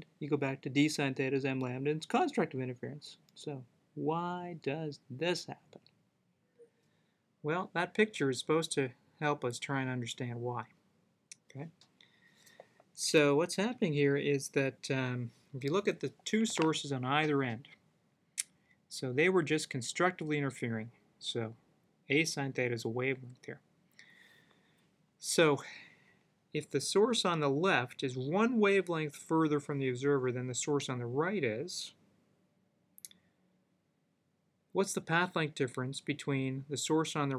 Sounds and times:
Narration, monologue: 0.0 - 37.3.

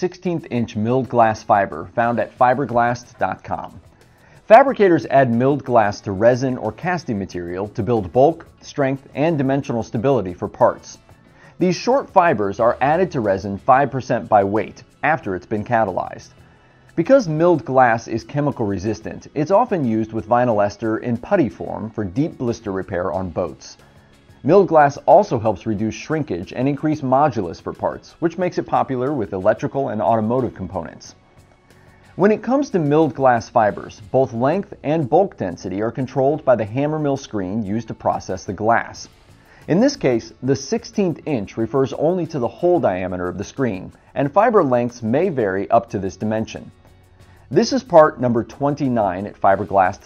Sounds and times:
Speech: 0.0 - 3.8, 4.4 - 11.0, 11.6 - 16.3, 17.0 - 23.8, 24.4 - 31.2, 32.2 - 39.1, 39.7 - 46.7, 47.5 - 50.0
Music: 0.0 - 50.0.

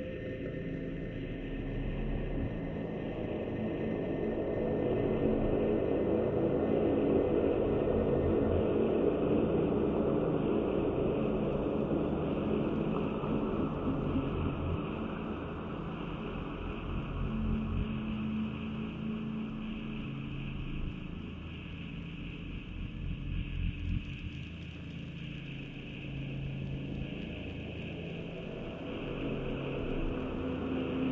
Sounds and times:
Music: 0.0 - 31.1.

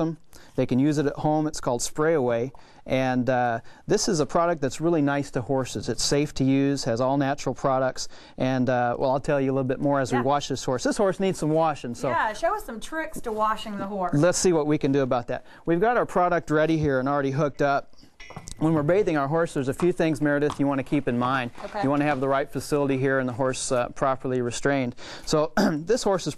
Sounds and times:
Speech: 0.0 - 17.8, 18.6 - 26.3.

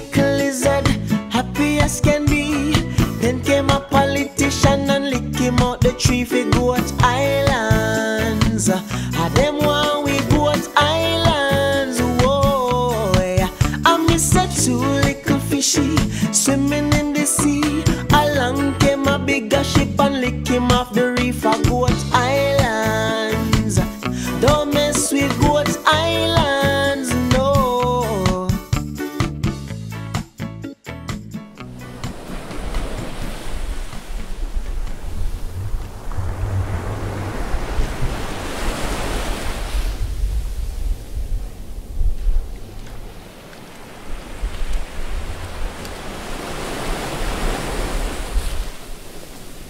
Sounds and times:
Music: 0.0 - 33.4.

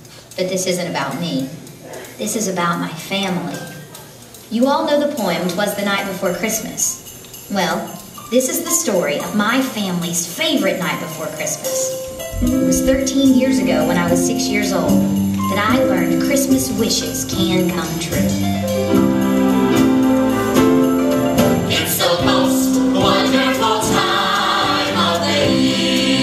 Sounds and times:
Speech: 0.4 - 18.5
Music: 5.8 - 26.2.

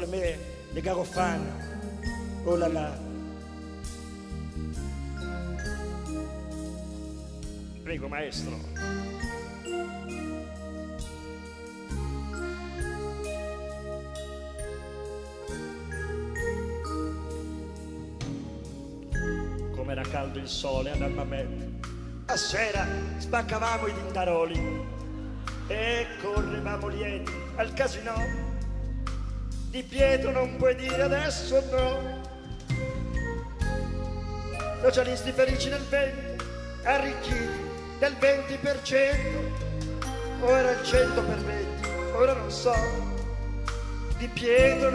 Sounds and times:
Speech: 0.0 - 1.6, 2.4 - 3.0, 7.8 - 8.7, 19.7 - 21.6, 22.3 - 24.7, 25.7 - 28.5, 29.8 - 32.1, 34.8 - 36.2, 40.4 - 43.0, 44.2 - 44.9
Music: 0.0 - 44.9.

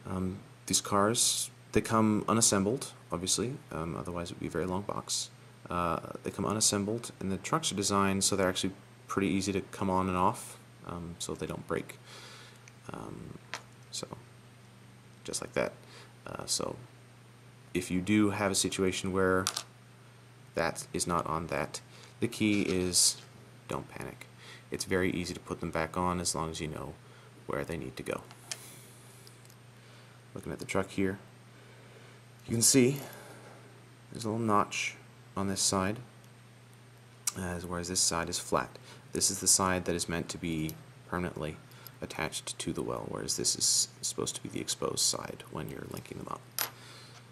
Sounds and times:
Speech: 0.0 - 12.0, 12.9 - 14.3, 15.2 - 16.9, 17.7 - 19.6, 20.6 - 28.3, 30.4 - 31.3, 32.4 - 33.2, 34.1 - 36.1, 37.3 - 46.5.

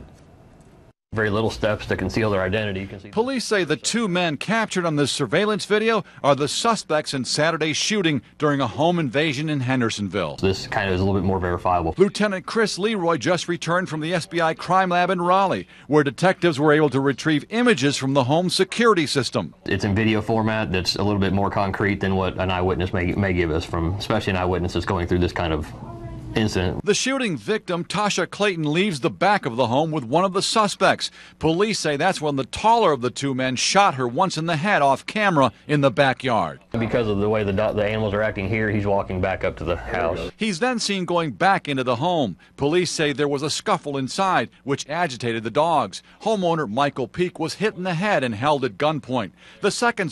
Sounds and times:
Speech: 1.1 - 50.1.

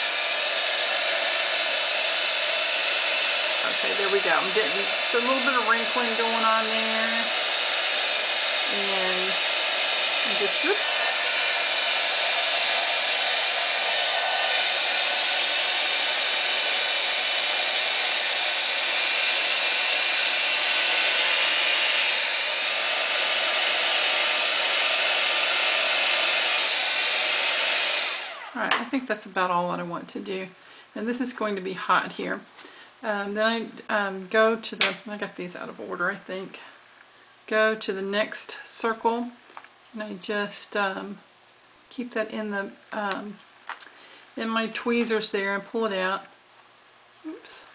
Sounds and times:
Hair dryer: 0.0 - 28.8.

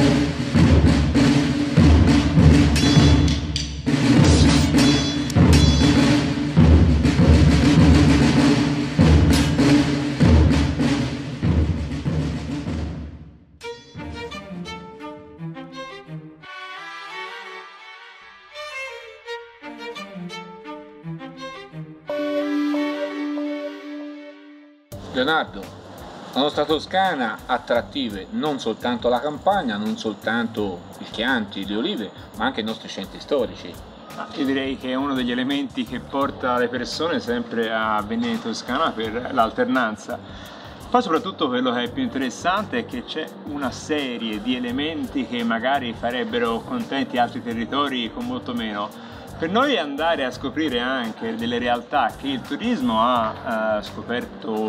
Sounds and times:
Music: 0.0 - 54.6.

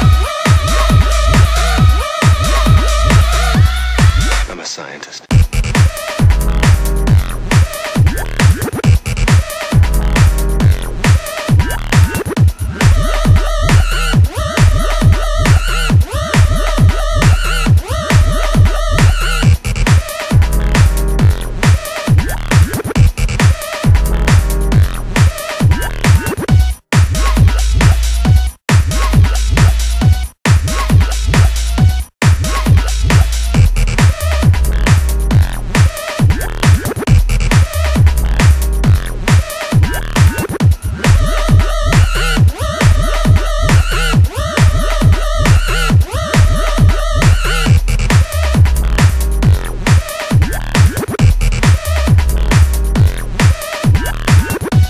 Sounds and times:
Techno: 0.0 - 4.7, 5.3 - 54.9.

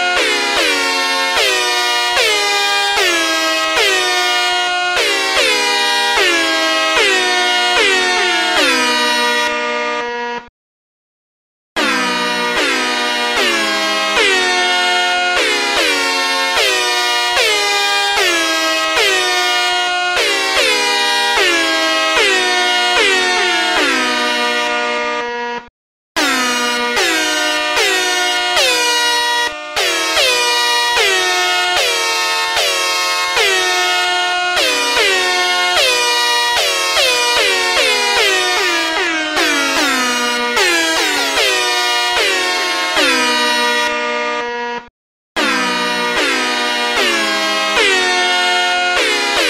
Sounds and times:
Music: 0.0 - 10.5, 11.8 - 49.5.

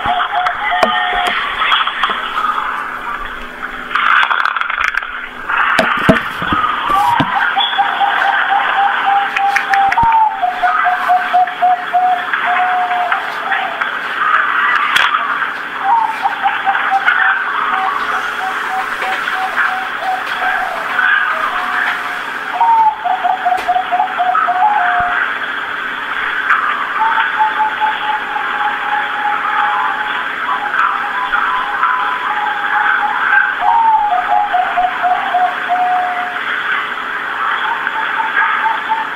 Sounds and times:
Bird vocalization, bird call, bird song: 6.4 - 14.8, 15.8 - 25.3, 26.6 - 36.4, 37.4 - 39.1.

